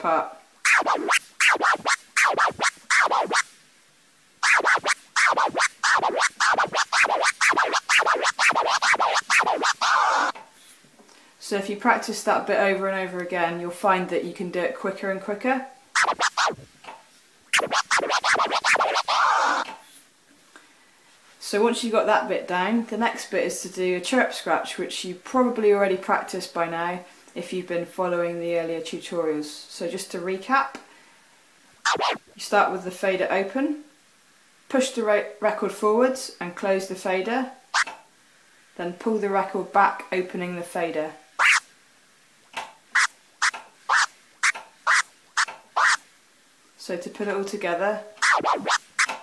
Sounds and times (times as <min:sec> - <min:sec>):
Speech: 0:00.0 - 0:00.4, 0:11.4 - 0:15.8, 0:21.4 - 0:30.9, 0:32.4 - 0:33.9, 0:34.7 - 0:37.6, 0:38.8 - 0:41.2, 0:46.8 - 0:48.2
Scratching (performance technique): 0:00.6 - 0:03.5, 0:04.4 - 0:10.4, 0:16.0 - 0:16.7, 0:17.5 - 0:19.7, 0:31.9 - 0:32.2, 0:41.4 - 0:41.7, 0:43.0 - 0:46.0, 0:48.2 - 0:49.2.